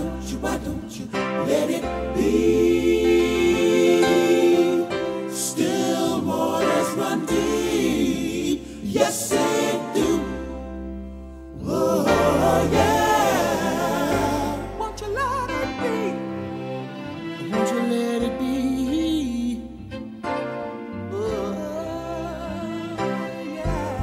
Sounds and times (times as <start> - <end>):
Music: 0.0 - 24.0.